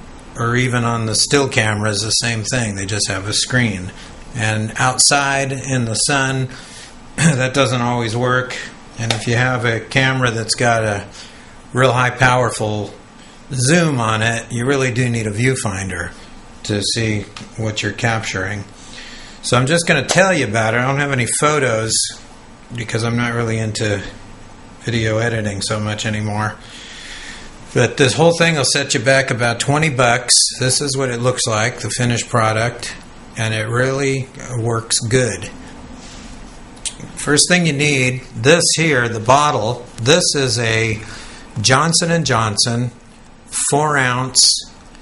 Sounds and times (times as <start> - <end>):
Speech: 0.4 - 6.6, 7.2 - 11.1, 11.7 - 18.7, 19.4 - 24.2, 24.8 - 26.6, 27.7 - 35.6, 36.9 - 44.8.